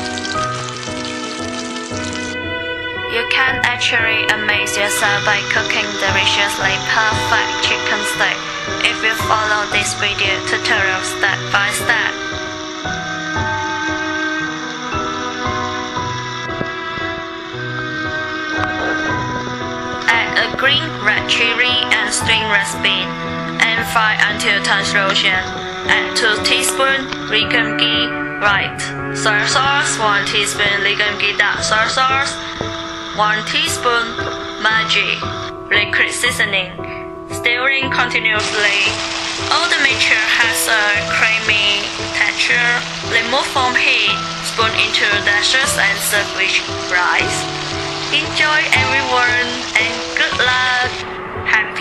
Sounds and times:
Frying (food): 0.0s - 2.4s, 3.8s - 27.6s, 38.4s - 51.1s.

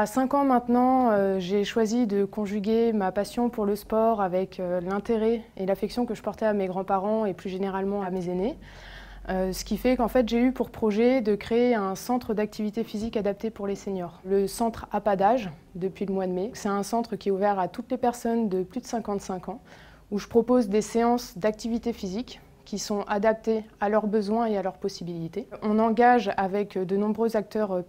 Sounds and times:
Speech: 0.0s - 8.6s, 9.3s - 27.8s.

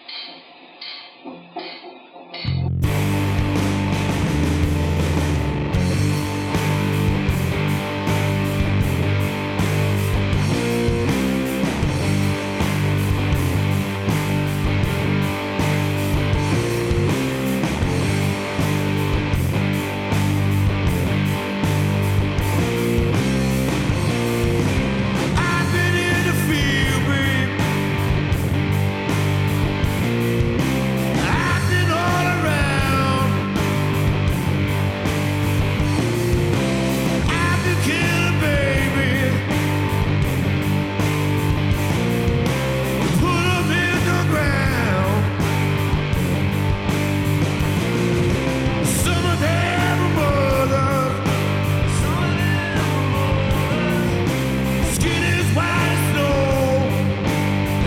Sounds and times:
Music: 0.0s - 57.8s.

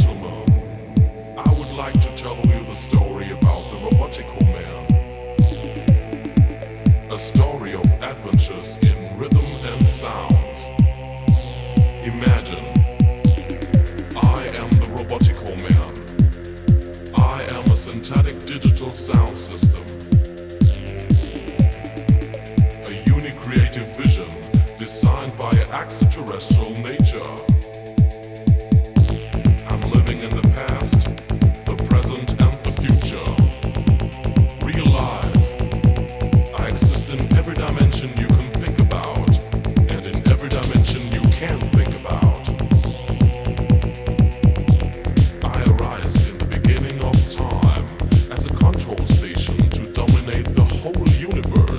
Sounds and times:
Speech: 0.0s - 0.7s, 1.4s - 5.0s, 7.1s - 10.8s, 12.0s - 12.8s, 14.2s - 16.0s, 17.1s - 20.0s, 22.8s - 27.6s, 29.6s - 33.6s, 34.6s - 35.6s, 36.5s - 42.7s, 45.4s - 51.7s
Sampler: 3.6s - 8.3s, 10.3s - 51.7s.

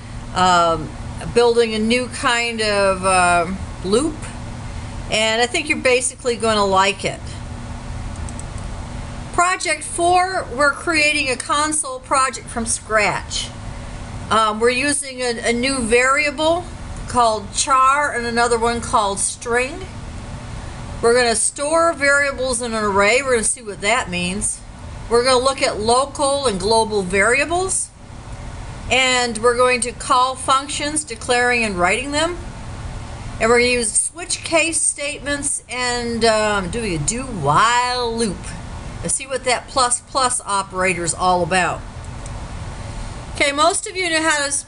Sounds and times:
Speech: 0.4s - 4.4s, 5.1s - 7.4s, 9.4s - 13.6s, 14.3s - 19.9s, 21.0s - 28.0s, 28.9s - 32.4s, 33.4s - 41.8s, 43.4s - 44.6s.

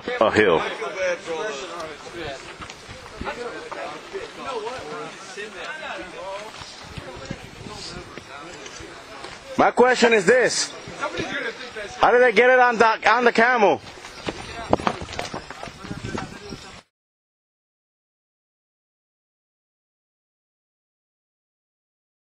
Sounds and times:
Speech: 0.0s - 16.9s.

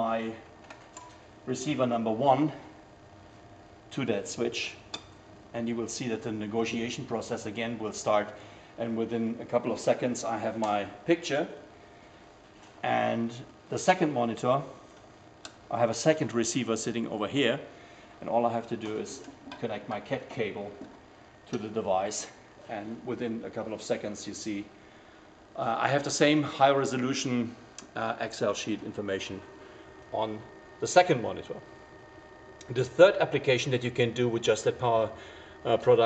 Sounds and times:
Speech: 0.0s - 0.5s, 1.5s - 2.7s, 3.9s - 4.9s, 5.5s - 11.6s, 12.8s - 14.8s, 15.7s - 20.9s, 21.5s - 24.8s, 25.6s - 29.5s, 30.1s - 31.6s, 32.7s - 36.0s.

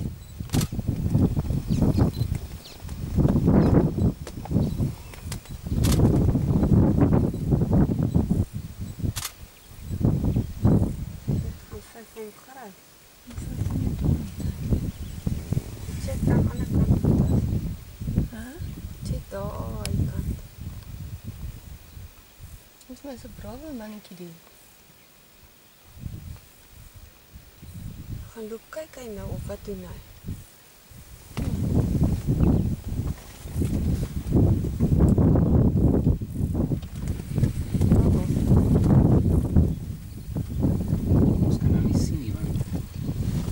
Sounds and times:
Speech: 11.5s - 14.1s, 16.0s - 17.3s, 22.8s - 24.4s, 28.3s - 30.0s, 41.4s - 42.7s.

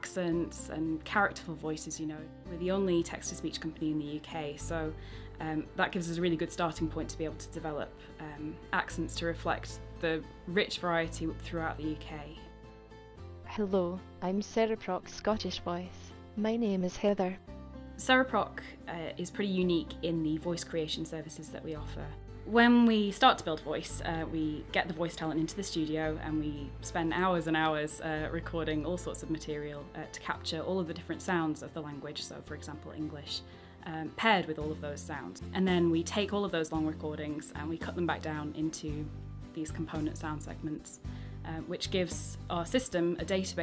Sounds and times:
Music: 0.0s - 43.6s
Speech synthesizer: 13.5s - 17.4s.

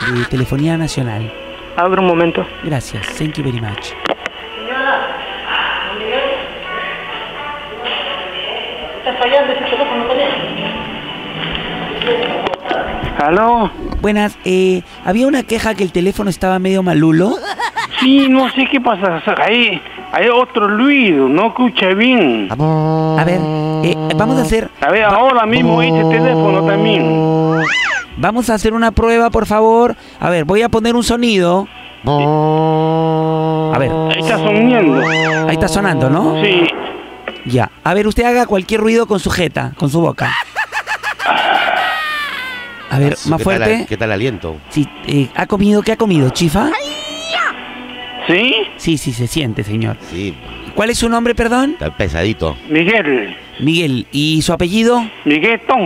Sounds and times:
Music: 0.0s - 32.4s, 42.9s - 55.8s
Speech: 18.0s - 27.1s, 33.8s - 36.8s.

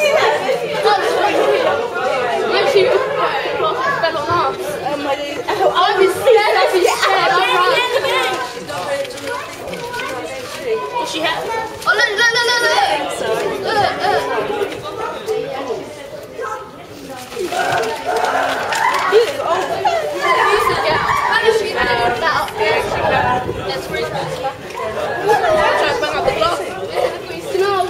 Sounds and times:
Speech: 0.0s - 27.8s.

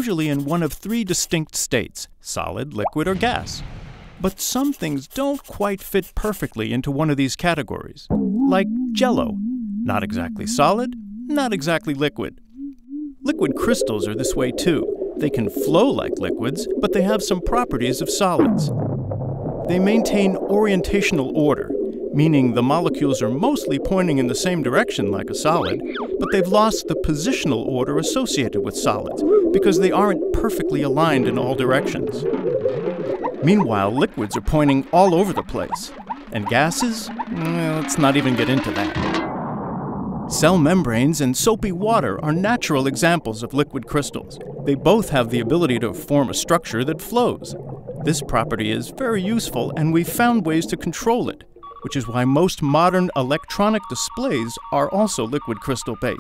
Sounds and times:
Speech: 0.0s - 12.4s, 13.3s - 18.7s, 19.7s - 32.2s, 33.4s - 39.2s, 40.3s - 56.2s
Liquid: 13.6s - 40.4s, 41.4s - 55.8s.

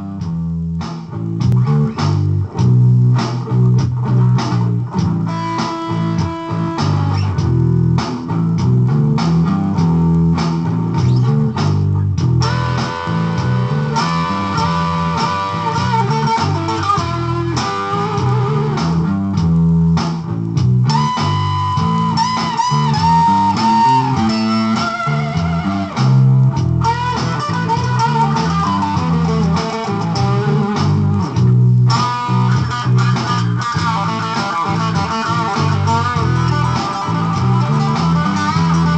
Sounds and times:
Bass guitar: 0.0s - 38.9s
Steel guitar, slide guitar: 2.7s - 8.0s, 9.0s - 19.7s, 20.9s - 38.9s.

